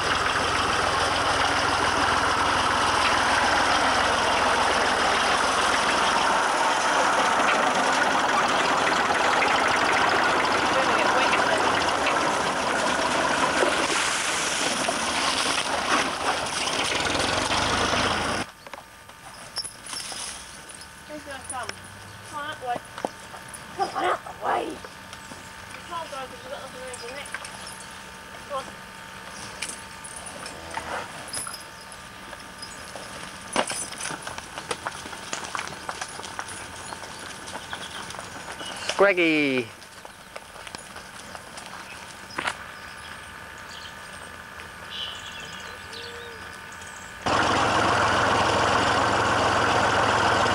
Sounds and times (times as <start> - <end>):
Vehicle: 0.0 - 50.5
Speech: 10.7 - 11.7, 25.8 - 27.3, 39.0 - 39.7.